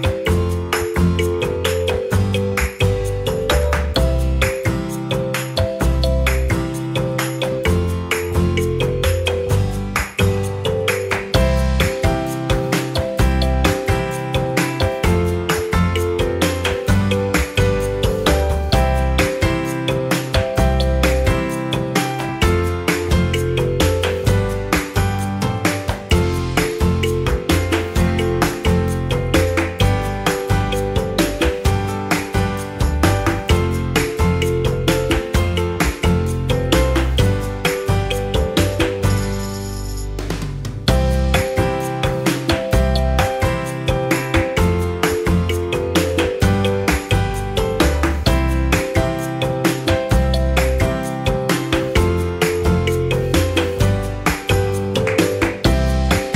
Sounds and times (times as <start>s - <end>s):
Music: 0.0s - 56.3s.